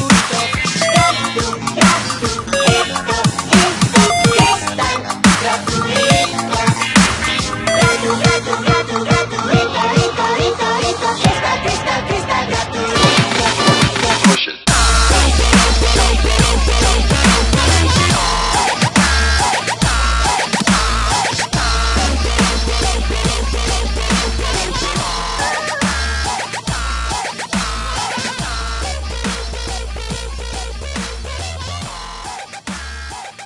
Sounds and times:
Dubstep: 0:00.0 - 0:09.6, 0:13.0 - 0:33.0.

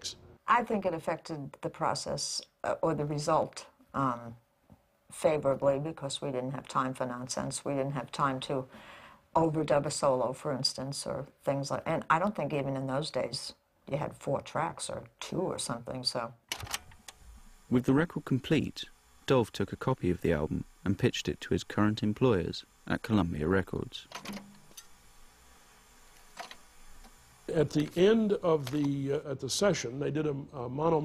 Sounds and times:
Speech: 0:00.0 - 0:04.4, 0:05.1 - 0:08.7, 0:09.4 - 0:16.4, 0:17.7 - 0:24.1, 0:27.5 - 0:31.0
Inside, small room: 0:00.0 - 0:31.0.

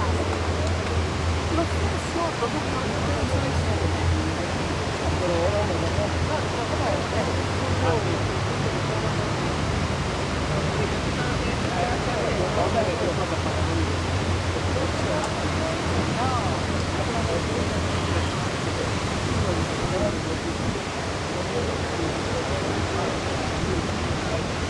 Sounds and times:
Speech: 0:00.0 - 0:24.7.

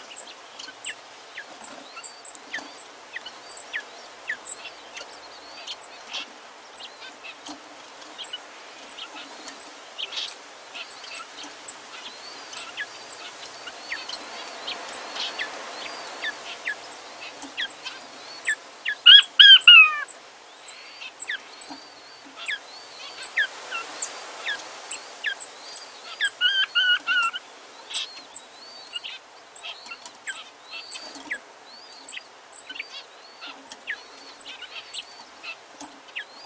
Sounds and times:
Chirp, tweet: 0:00.0 - 0:36.4.

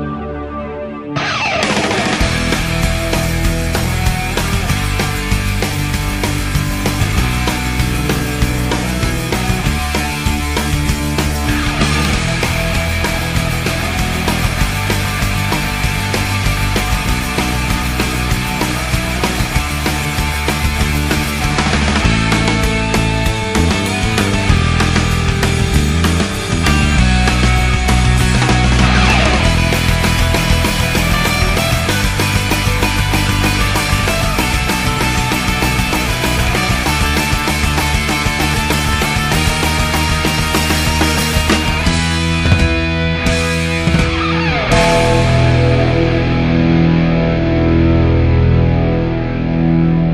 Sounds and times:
Music: 0:00.0 - 0:50.1.

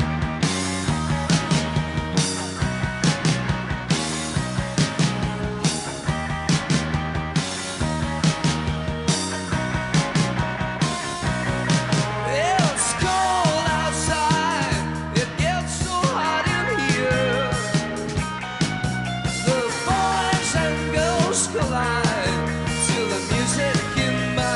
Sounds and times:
Grunge: 0:00.0 - 0:24.5.

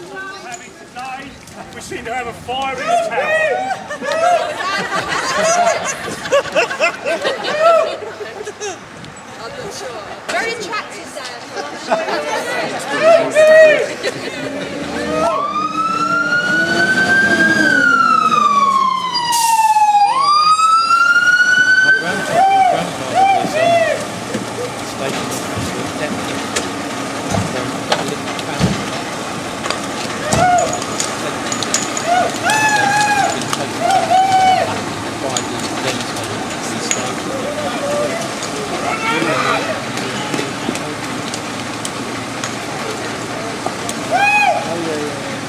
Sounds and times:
Fire engine, fire truck (siren): 0:14.9 - 0:26.4, 0:29.6 - 0:40.5.

